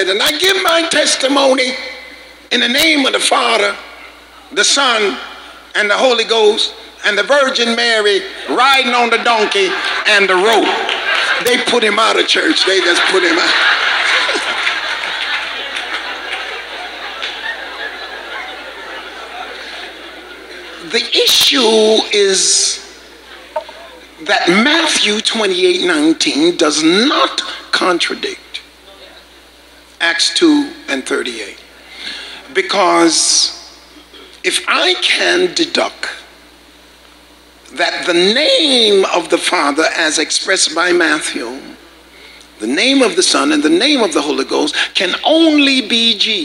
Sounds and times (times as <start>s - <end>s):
Speech: 0.0s - 3.8s, 4.4s - 13.6s, 20.8s - 29.2s, 30.0s - 31.6s, 32.5s - 33.7s, 34.4s - 36.3s, 37.7s - 41.8s, 42.6s - 46.4s
Inside, large room or hall: 0.0s - 46.4s.